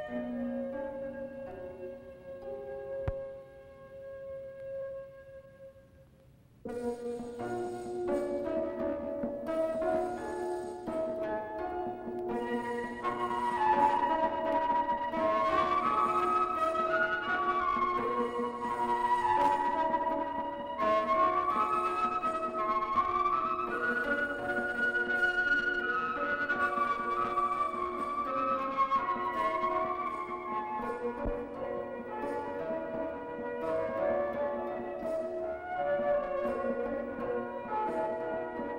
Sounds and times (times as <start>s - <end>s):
Music: 0.0s - 38.7s.